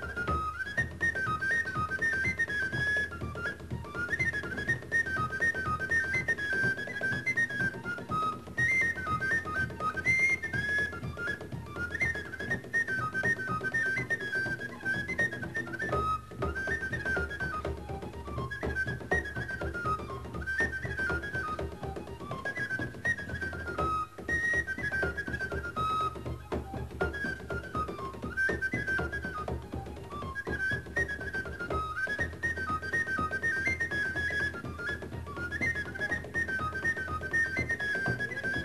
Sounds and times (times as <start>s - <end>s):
Music: 0.0s - 38.6s.